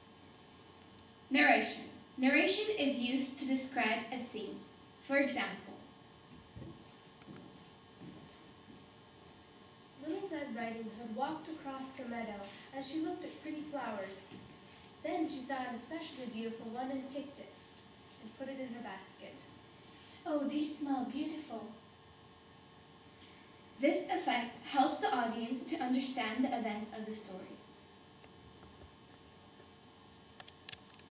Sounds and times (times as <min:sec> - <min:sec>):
Speech: 0:01.3 - 0:05.9, 0:10.0 - 0:14.4, 0:15.0 - 0:17.6, 0:18.2 - 0:19.6, 0:20.2 - 0:21.8, 0:23.8 - 0:27.7.